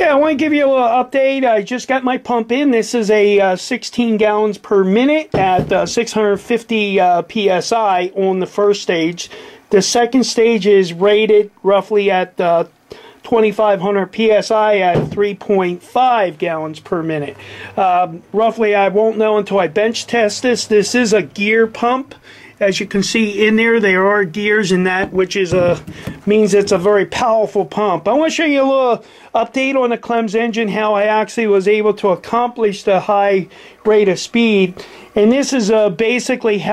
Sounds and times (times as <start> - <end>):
Speech: 0.0 - 36.7.